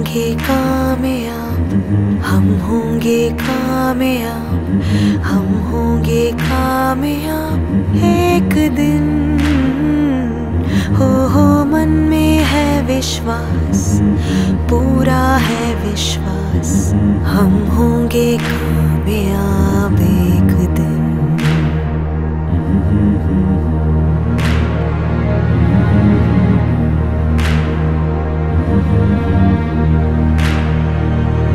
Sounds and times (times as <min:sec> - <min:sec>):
Music: 0:00.0 - 0:31.5.